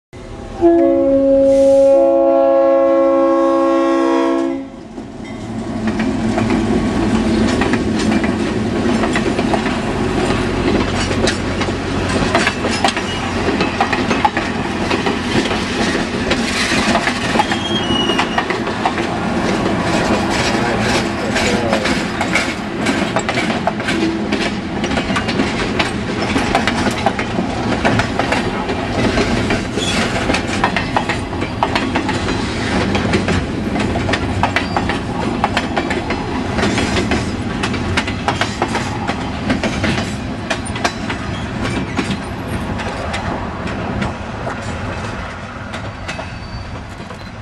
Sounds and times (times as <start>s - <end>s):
Railroad car, train wagon: 0.2s - 47.4s
Train: 0.2s - 47.4s.